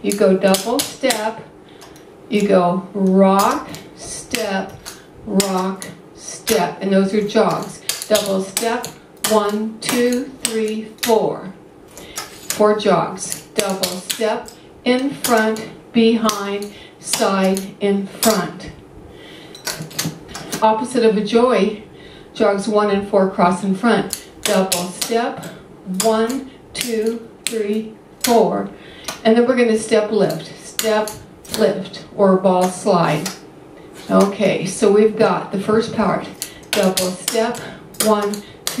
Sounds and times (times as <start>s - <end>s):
Speech: 0.0s - 1.5s, 2.3s - 11.6s, 12.5s - 18.8s, 20.5s - 21.8s, 22.4s - 33.4s, 34.0s - 38.8s.